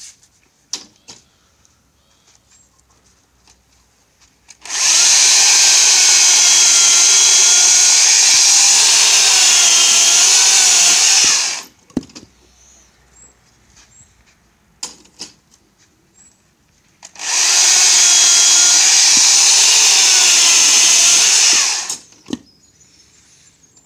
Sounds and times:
Chainsaw: 0:04.5 - 0:11.7, 0:17.0 - 0:22.1.

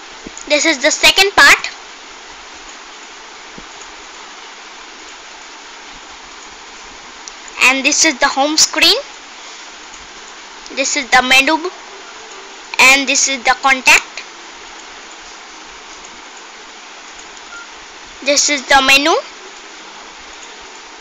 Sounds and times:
Speech: 0:00.5 - 0:01.8, 0:07.6 - 0:09.1, 0:10.7 - 0:11.8, 0:12.7 - 0:14.3, 0:18.2 - 0:19.4.

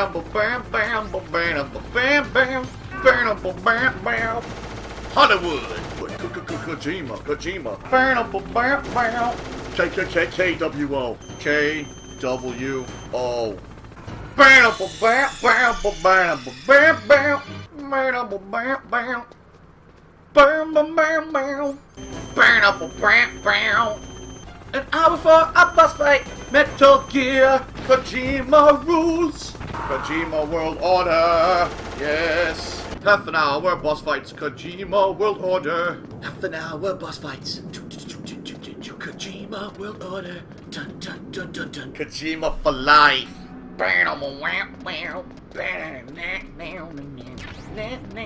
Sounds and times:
Speech: 0:05.2 - 0:13.6, 0:14.4 - 0:19.3, 0:24.8 - 0:48.2.

